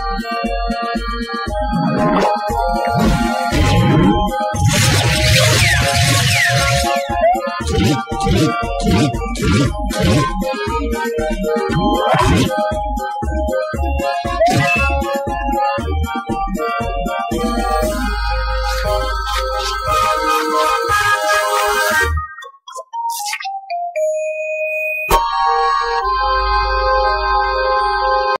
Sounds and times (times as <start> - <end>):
Sound effect: 1.6 - 12.8, 14.0 - 15.3, 17.3 - 23.6.